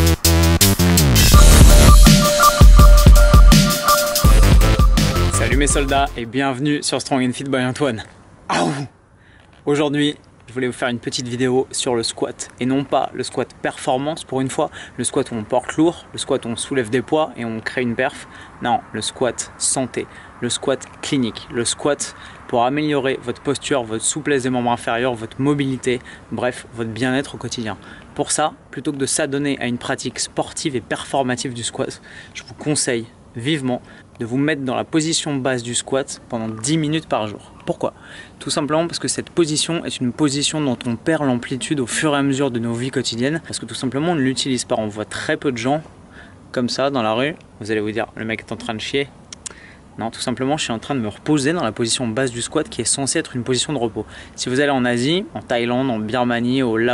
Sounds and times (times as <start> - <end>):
Speech: 5.4 - 8.9, 9.6 - 45.9, 46.5 - 49.2, 50.0 - 56.9.